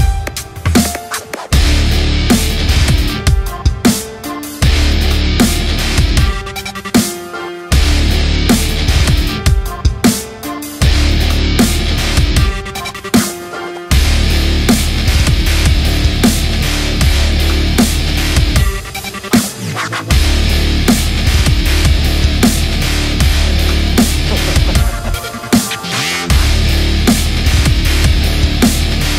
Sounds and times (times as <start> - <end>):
Dubstep: 0.3 - 29.1.